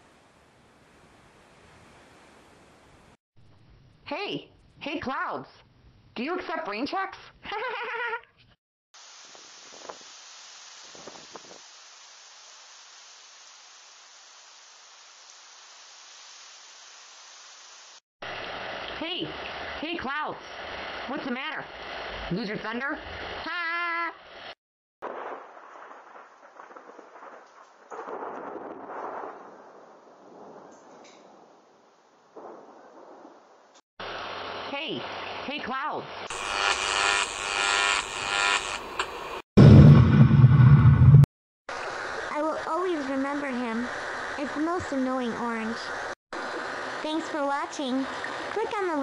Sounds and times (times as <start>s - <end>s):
Thunder: 25.0s - 31.7s, 32.3s - 33.6s, 39.6s - 41.3s.